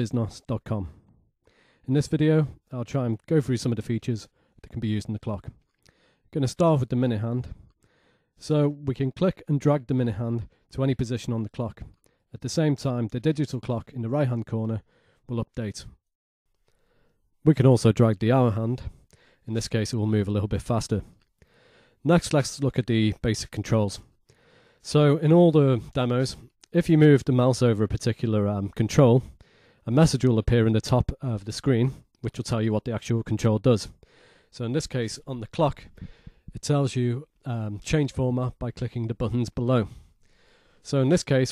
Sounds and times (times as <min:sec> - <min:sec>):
Speech: 0:00.0 - 0:01.0, 0:01.9 - 0:05.6, 0:06.3 - 0:07.6, 0:08.4 - 0:16.0, 0:17.4 - 0:21.2, 0:22.0 - 0:24.1, 0:24.8 - 0:40.0, 0:40.8 - 0:41.5.